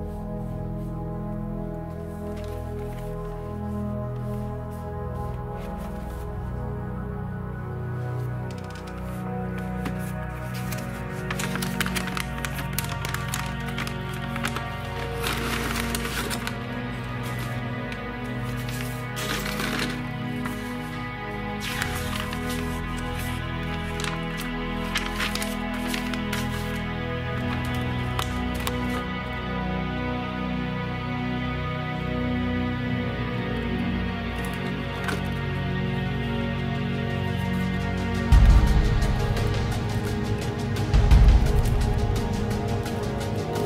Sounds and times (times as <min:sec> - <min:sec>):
Music: 0:00.0 - 0:43.6.